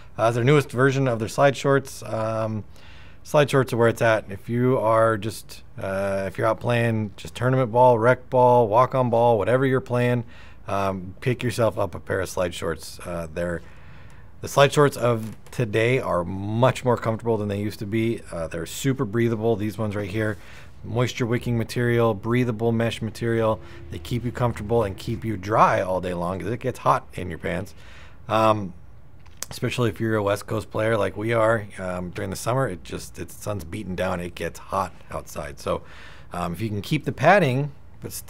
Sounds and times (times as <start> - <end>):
Speech: 0.2 - 2.7, 3.3 - 13.6, 14.4 - 28.8, 29.4 - 38.2.